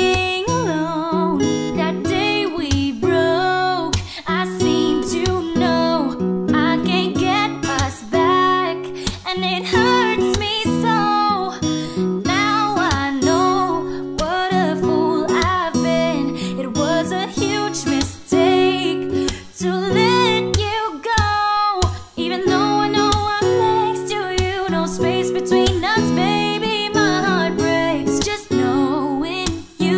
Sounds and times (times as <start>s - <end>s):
Music: 0.0s - 29.9s.